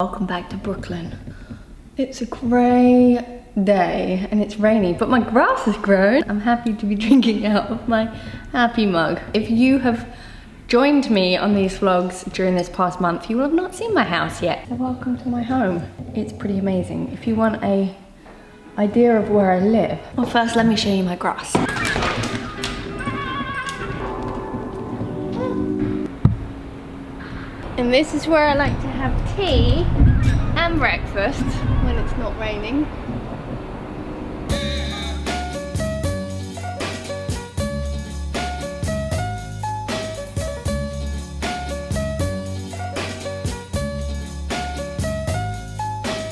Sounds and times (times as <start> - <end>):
Speech: 2.0 - 10.1, 10.7 - 18.0, 18.8 - 21.6, 30.6 - 32.9
Music: 17.3 - 20.1, 21.9 - 26.7, 34.4 - 46.3.